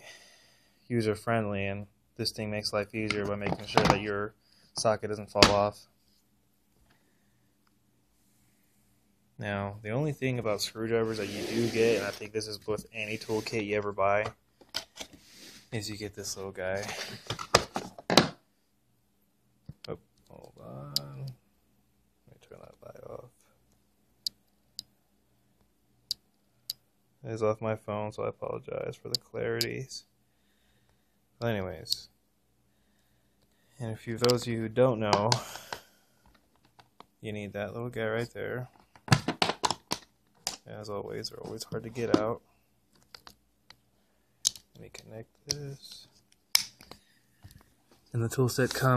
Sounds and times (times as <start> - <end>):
Speech: 0.9 - 5.9, 9.4 - 14.4, 15.7 - 17.1, 19.9 - 21.4, 22.3 - 23.5, 27.2 - 30.1, 31.4 - 32.1, 33.8 - 35.5, 37.2 - 38.7, 40.6 - 42.4, 44.8 - 46.1, 48.1 - 48.9.